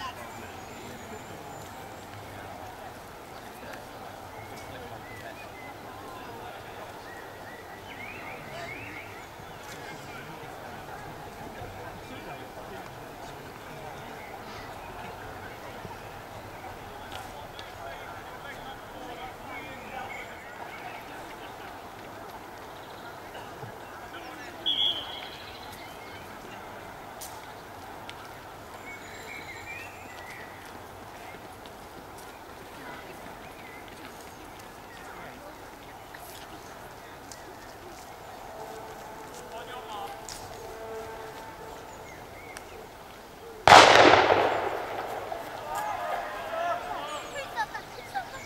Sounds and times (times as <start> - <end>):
Speech: 0.0 - 29.9, 32.6 - 41.9, 45.4 - 48.4
Outside, urban or manmade: 0.0 - 48.4.